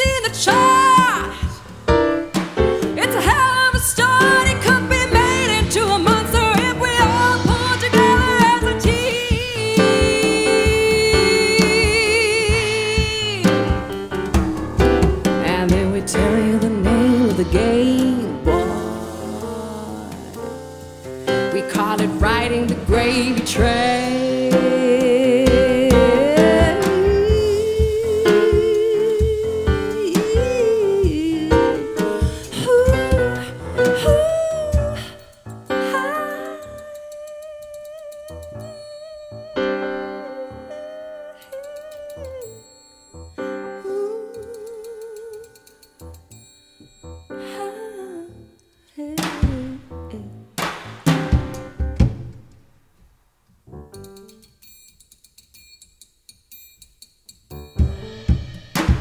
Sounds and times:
Drum: 0:00.0 - 0:37.0, 0:49.2 - 0:50.0, 0:50.6 - 0:52.7, 0:57.5 - 0:59.0
Drum kit: 0:00.0 - 0:47.6, 0:49.2 - 0:52.8, 0:53.7 - 0:54.5, 0:57.5 - 0:59.0.

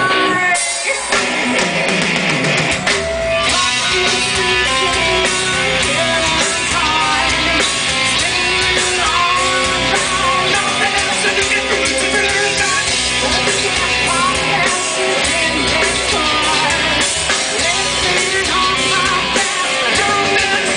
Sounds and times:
Heavy metal: 0:00.0 - 0:20.7
Rock and roll: 0:00.0 - 0:20.7.

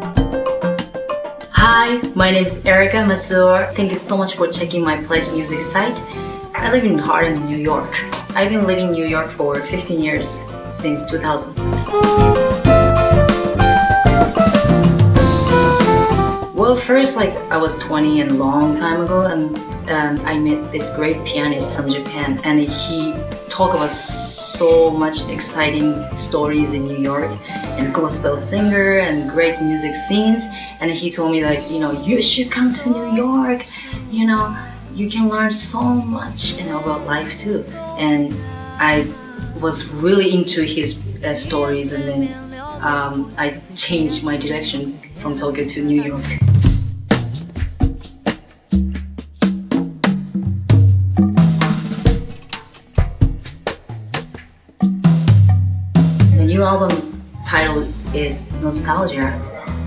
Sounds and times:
Music: 0:00.0 - 0:59.8
Speech: 0:01.6 - 0:11.6, 0:16.6 - 0:46.5, 0:56.3 - 0:59.6.

